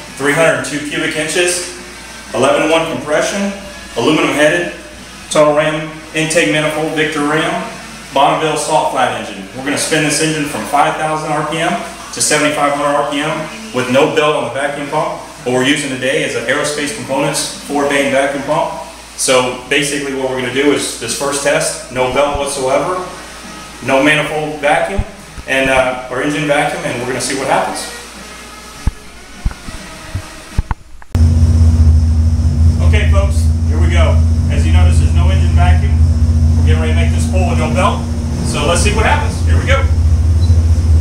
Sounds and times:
Speech: 0.2s - 23.2s, 23.8s - 28.1s, 32.8s - 36.0s, 36.6s - 40.0s.

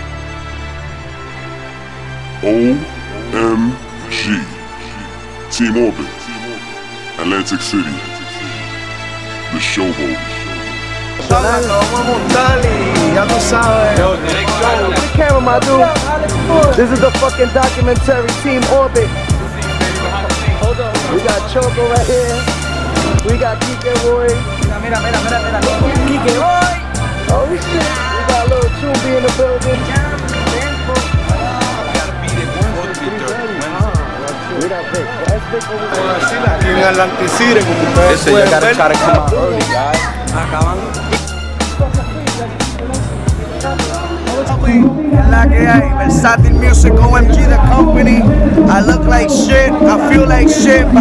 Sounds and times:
Music: 0.0s - 51.0s.

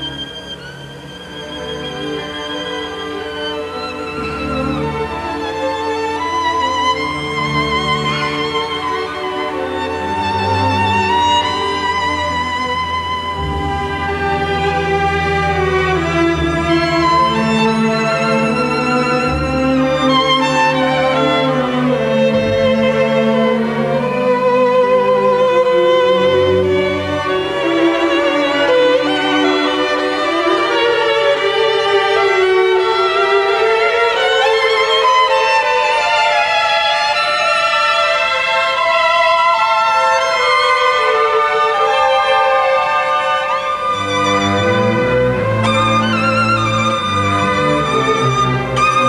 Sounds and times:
Violin, fiddle: 0.0s - 49.0s.

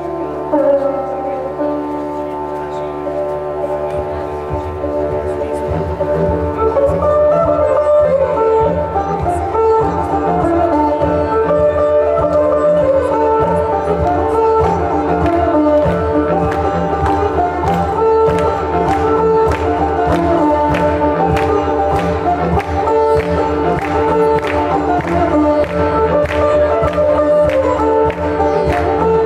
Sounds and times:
Speech: 0.0s - 16.6s
Music: 0.0s - 29.2s.

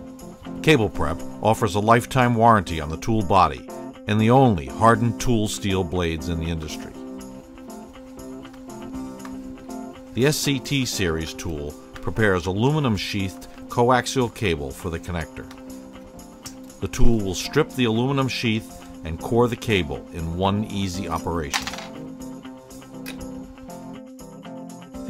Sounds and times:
Music: 0.0s - 25.0s
Speech: 0.6s - 7.0s, 10.2s - 15.5s, 16.8s - 21.7s.

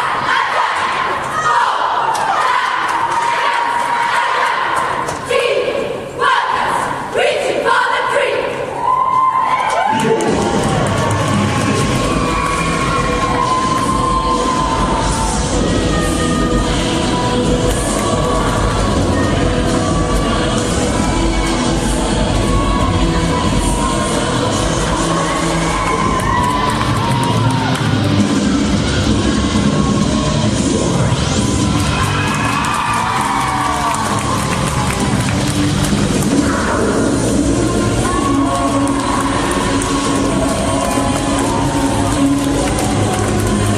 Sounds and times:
Cheering: 0.0s - 5.1s, 8.8s - 36.9s, 37.5s - 43.7s
Music: 9.2s - 43.7s.

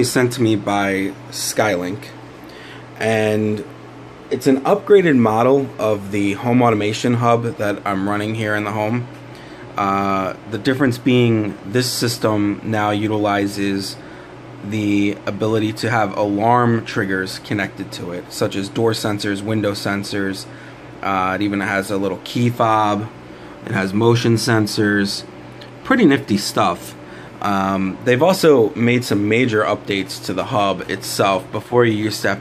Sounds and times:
Speech: 0.0s - 2.2s, 3.0s - 3.7s, 4.3s - 9.1s, 9.8s - 14.0s, 14.6s - 32.4s.

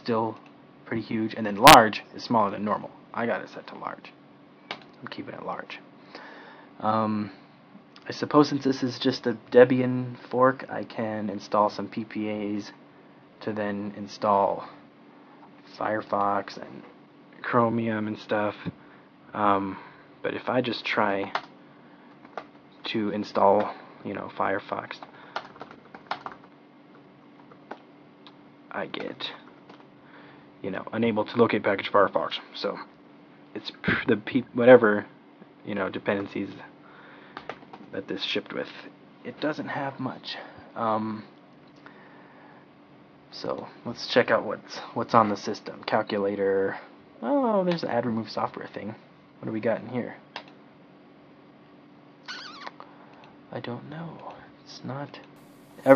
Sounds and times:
Speech: 0.0s - 4.2s, 5.0s - 5.9s, 6.8s - 7.4s, 8.0s - 12.8s, 13.4s - 14.8s, 15.6s - 21.4s, 22.8s - 25.1s, 28.7s - 29.5s, 30.6s - 32.9s, 33.5s - 36.8s, 37.9s - 41.4s, 43.3s - 50.3s, 53.5s - 55.9s
Inside, small room: 0.0s - 55.9s.

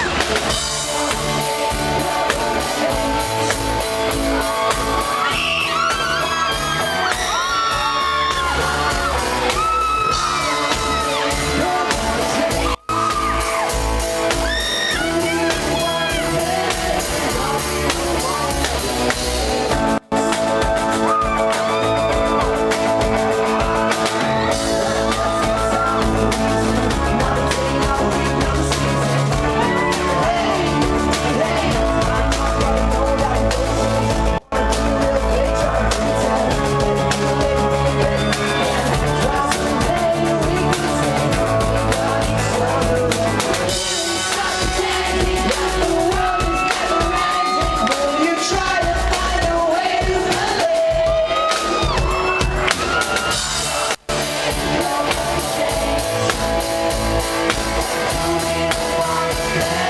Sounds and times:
Music: 0.0s - 59.9s
Singing: 0.0s - 59.9s.

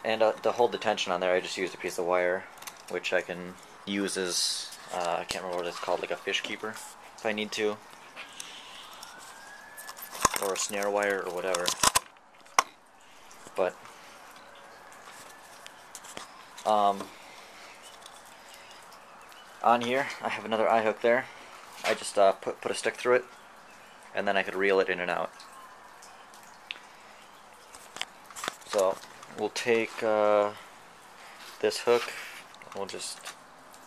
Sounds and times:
Speech: 0.0s - 7.8s, 10.4s - 11.7s, 16.7s - 17.1s, 19.6s - 23.3s, 24.2s - 25.3s, 28.7s - 30.6s, 31.6s - 32.1s, 32.8s - 33.3s
Outside, rural or natural: 0.0s - 33.8s.

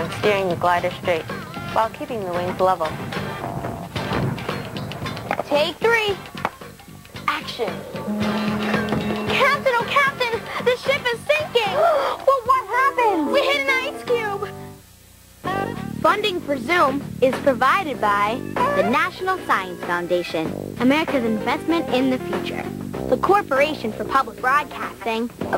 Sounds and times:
Speech: 0.0s - 2.9s, 5.4s - 6.2s, 16.0s - 25.5s
Music: 0.0s - 25.5s.

